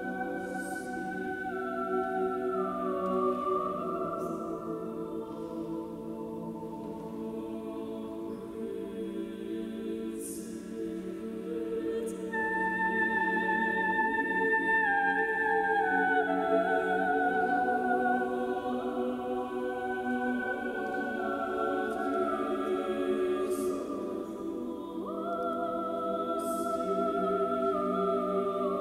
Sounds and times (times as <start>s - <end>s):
Choir: 0.0s - 28.8s
Female singing: 7.3s - 28.8s.